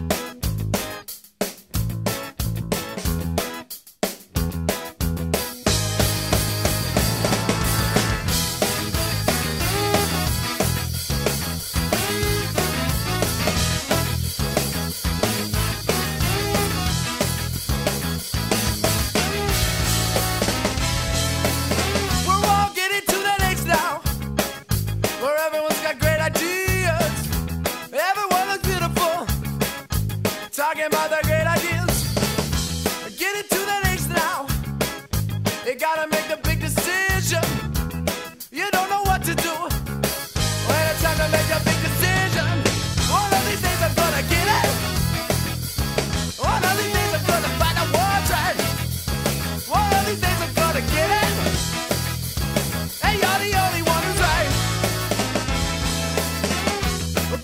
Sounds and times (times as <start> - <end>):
Music: 0.0 - 57.4.